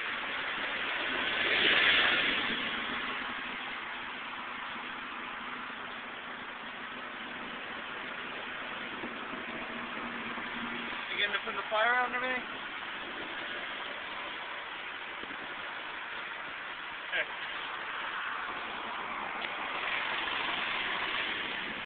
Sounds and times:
Vehicle: 0.0 - 21.8.

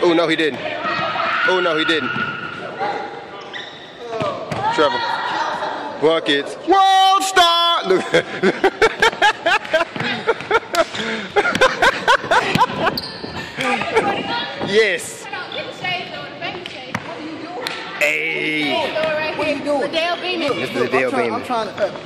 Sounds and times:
Inside, large room or hall: 0.0 - 22.0.

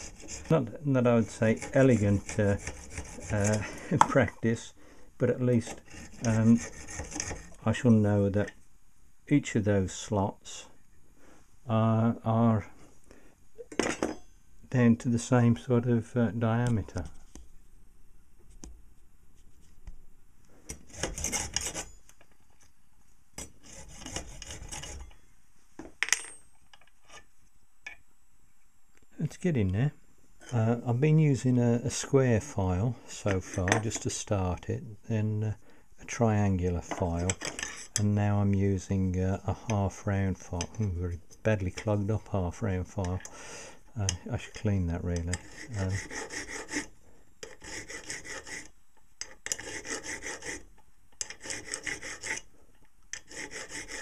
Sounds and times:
Filing (rasp): 0.0 - 3.8, 5.6 - 7.6, 20.7 - 21.9, 23.4 - 25.0, 45.2 - 52.5, 53.2 - 54.0
Rub: 0.0 - 3.9, 5.6 - 7.6, 23.6 - 25.0, 45.2 - 52.5, 53.2 - 54.0.

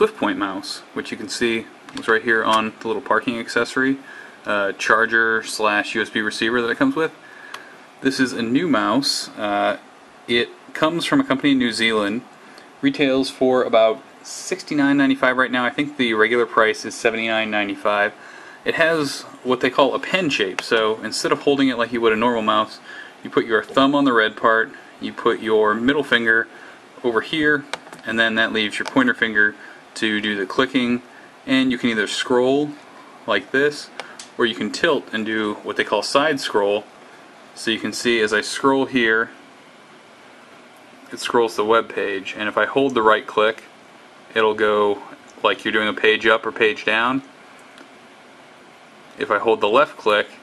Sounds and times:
Speech: 0.0 - 7.2, 8.0 - 36.9, 37.6 - 39.4, 41.1 - 43.7, 44.3 - 47.3, 49.2 - 50.4.

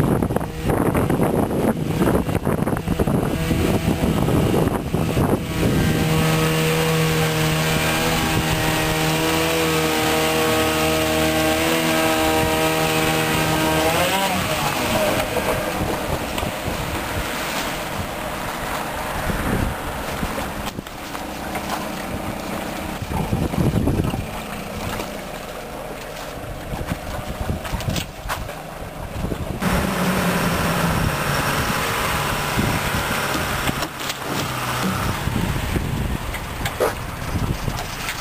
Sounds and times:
Motorboat, speedboat: 0.0 - 38.2.

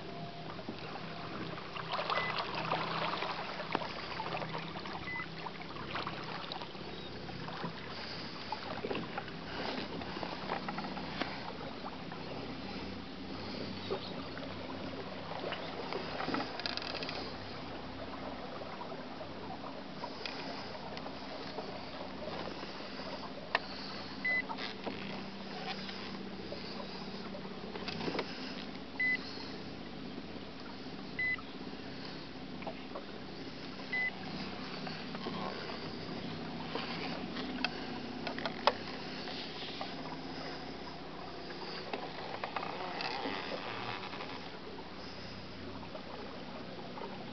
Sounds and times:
Boat, Water vehicle: 0.0 - 47.3.

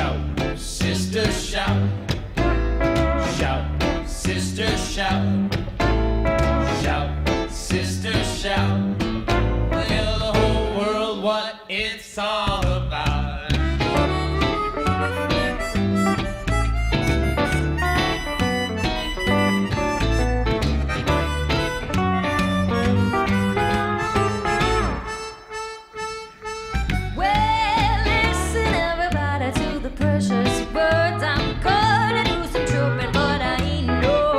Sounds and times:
Music: 0.0 - 34.3.

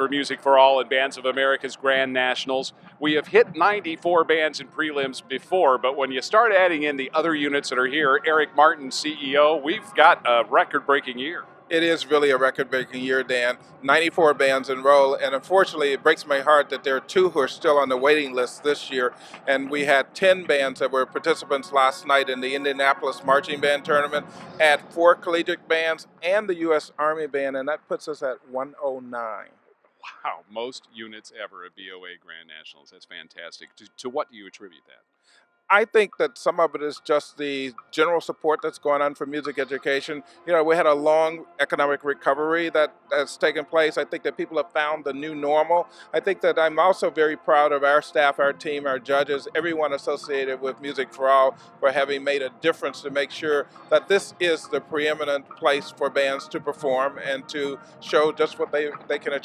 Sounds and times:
Speech: 0.0 - 29.5, 30.1 - 35.0, 35.7 - 59.4.

